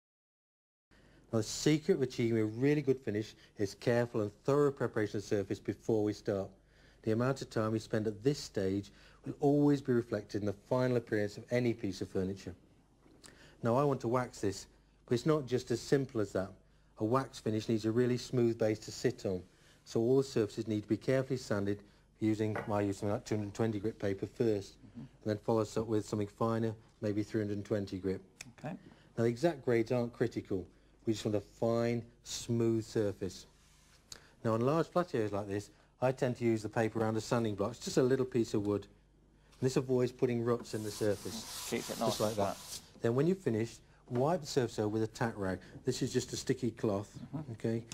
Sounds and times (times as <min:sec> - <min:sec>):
Speech: 0:01.3 - 0:12.6, 0:13.6 - 0:33.6, 0:34.4 - 0:39.0, 0:39.6 - 0:47.9.